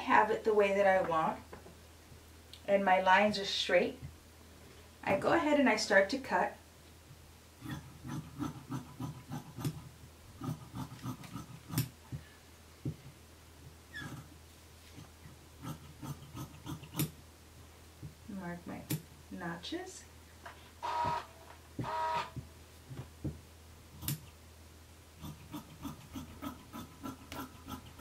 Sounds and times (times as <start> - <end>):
Speech: 0.0 - 1.4, 2.7 - 4.0, 5.0 - 6.6, 18.3 - 20.1.